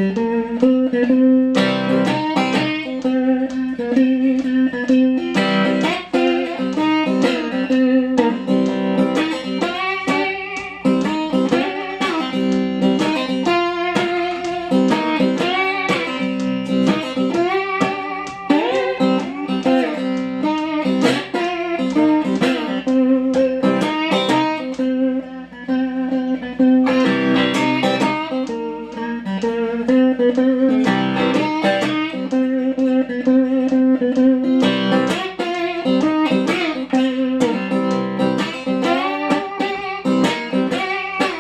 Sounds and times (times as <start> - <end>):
Strum: 0.0 - 41.4.